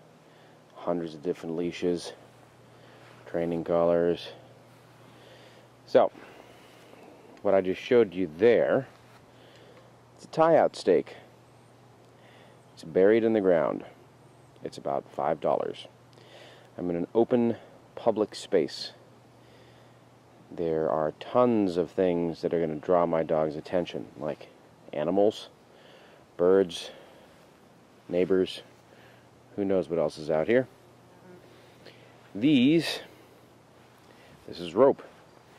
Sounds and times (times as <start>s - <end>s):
Speech: 0.8s - 2.2s, 3.2s - 4.4s, 5.9s - 6.2s, 7.4s - 9.0s, 10.2s - 11.3s, 12.8s - 14.0s, 14.6s - 15.9s, 16.8s - 19.0s, 20.5s - 25.6s, 26.4s - 27.0s, 28.1s - 28.7s, 29.5s - 30.8s, 32.3s - 33.1s, 34.4s - 35.1s.